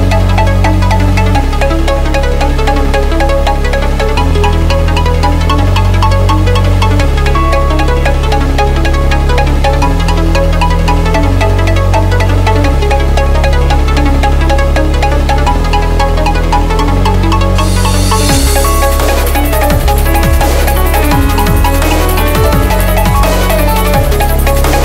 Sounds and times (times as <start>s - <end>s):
Dubstep: 0.0s - 24.8s.